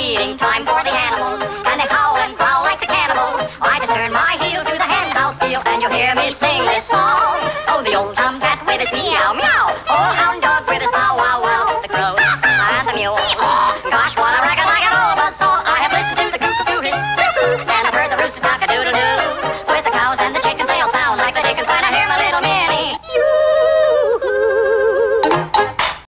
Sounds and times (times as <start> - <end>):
Music: 0.0 - 23.1, 24.9 - 26.1.